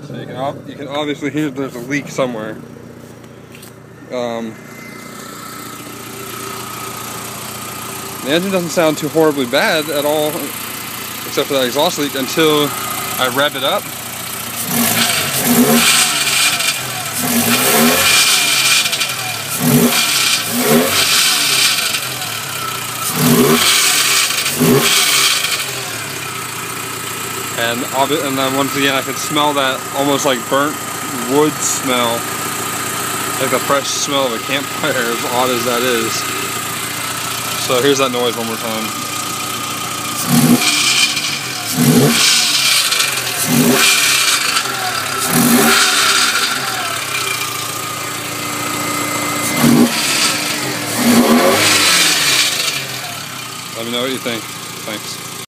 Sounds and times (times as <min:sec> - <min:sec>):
Speech: 0:00.0 - 0:02.6, 0:04.1 - 0:04.6, 0:08.2 - 0:10.5, 0:11.3 - 0:13.8, 0:27.6 - 0:32.2, 0:33.4 - 0:36.3, 0:37.6 - 0:38.9, 0:53.8 - 0:55.2
Car: 0:00.0 - 0:55.4
Heavy engine (low frequency): 0:00.0 - 0:55.4
Accelerating, revving, vroom: 0:14.6 - 0:22.1, 0:23.0 - 0:25.7, 0:40.2 - 0:47.0, 0:49.4 - 0:52.9.